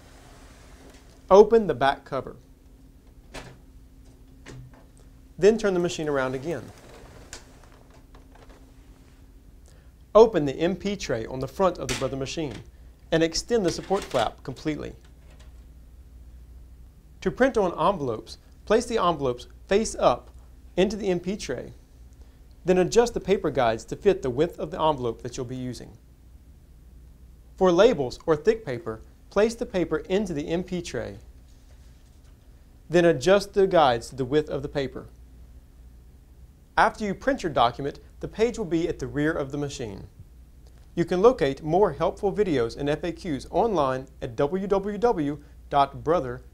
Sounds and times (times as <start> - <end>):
Speech: 1.3 - 2.4, 5.4 - 6.8, 10.2 - 15.0, 17.2 - 21.8, 22.6 - 26.0, 27.6 - 31.3, 32.9 - 35.2, 36.8 - 40.2, 41.0 - 46.5.